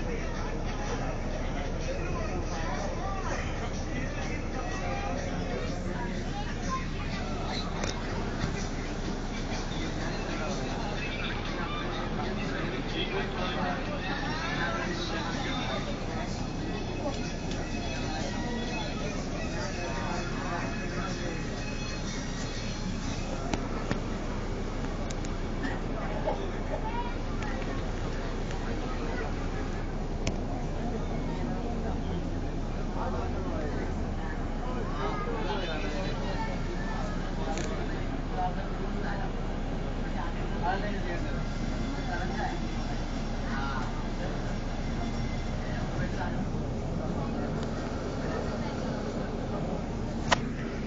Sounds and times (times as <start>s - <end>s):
Speech: 0.0s - 50.8s.